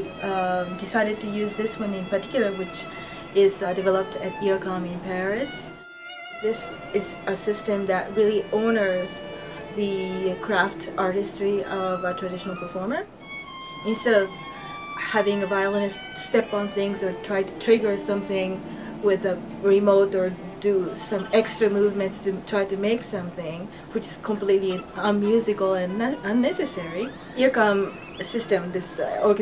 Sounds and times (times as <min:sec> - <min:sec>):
Speech: 0:00.0 - 0:05.7, 0:06.4 - 0:13.1, 0:13.8 - 0:14.4, 0:15.0 - 0:29.4
Violin, fiddle: 0:00.0 - 0:23.0, 0:23.9 - 0:29.4.